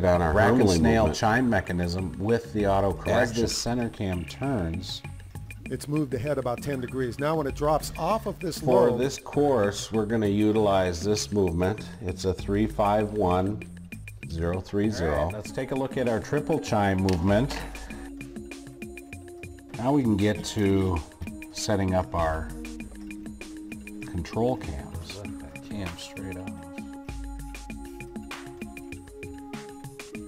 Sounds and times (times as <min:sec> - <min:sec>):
Speech: 0:00.0 - 0:05.1, 0:05.7 - 0:13.6, 0:14.3 - 0:17.8, 0:19.8 - 0:22.5, 0:24.1 - 0:26.6
Music: 0:00.0 - 0:30.2.